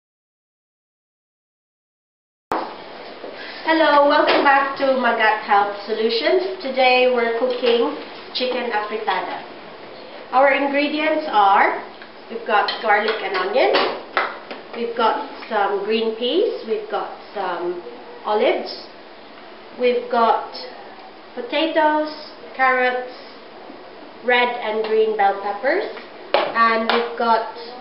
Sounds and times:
Speech: 3.6 - 9.5, 10.3 - 14.0, 14.8 - 19.0, 19.8 - 23.4, 24.2 - 27.8.

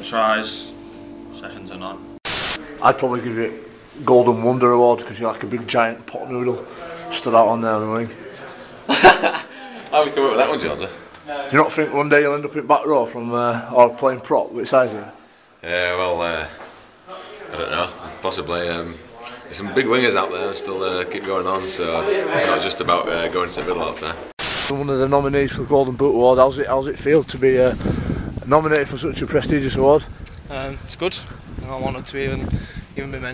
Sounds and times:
Speech: 2.6 - 8.8, 9.9 - 27.8, 28.4 - 33.3.

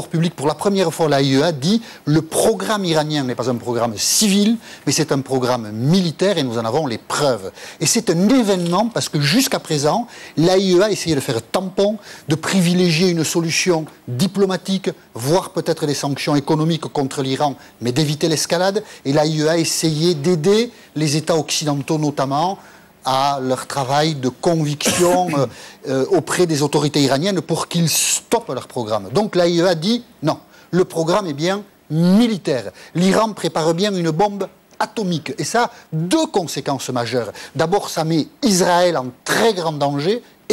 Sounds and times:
Speech: 0.0 - 40.5.

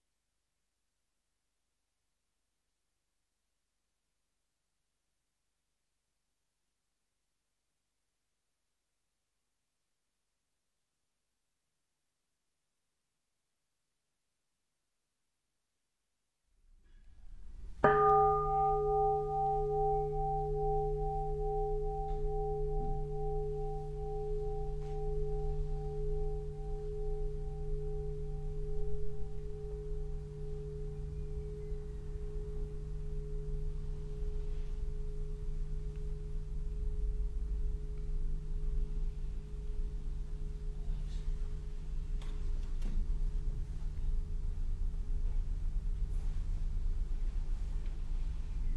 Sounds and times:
Music: 16.8 - 48.7.

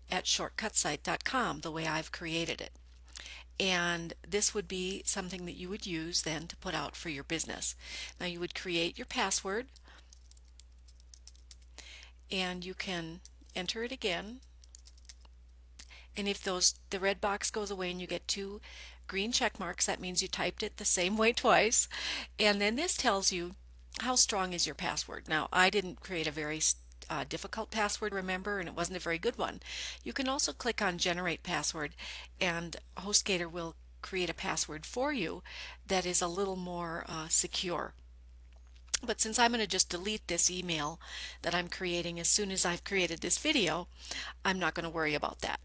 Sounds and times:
Inside, small room: 0.0 - 45.6
Speech: 0.1 - 2.7, 3.6 - 9.7, 12.3 - 14.4, 16.2 - 38.0, 39.0 - 45.6.

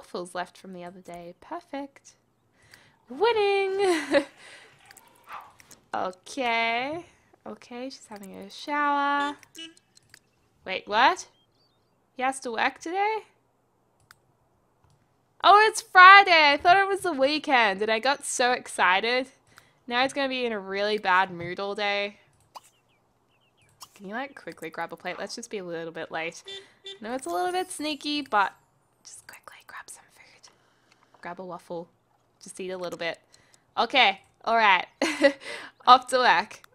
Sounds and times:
Speech: 0.0 - 2.2, 3.1 - 4.2, 6.0 - 9.4, 10.7 - 11.3, 12.2 - 13.3, 15.4 - 19.3, 19.9 - 22.2, 24.0 - 28.5, 31.2 - 33.2, 33.8 - 35.0, 35.8 - 36.6
Whispering: 29.1 - 30.5.

